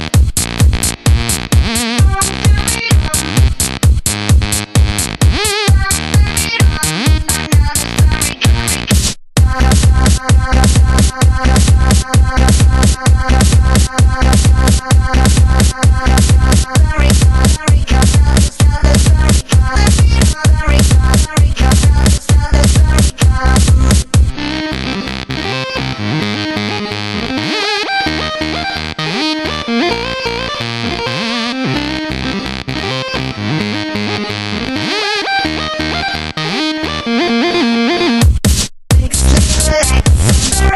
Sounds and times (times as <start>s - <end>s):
Techno: 0.0s - 40.7s.